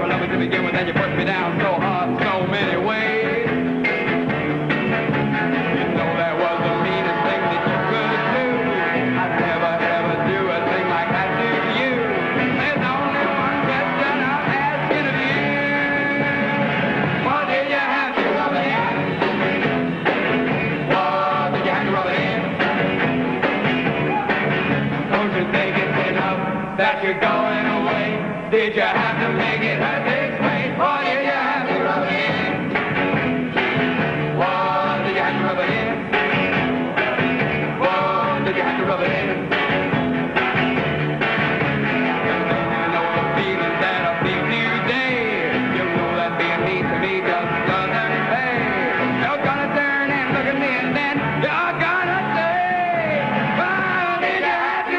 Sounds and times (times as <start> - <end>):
Music: 0.0 - 54.9.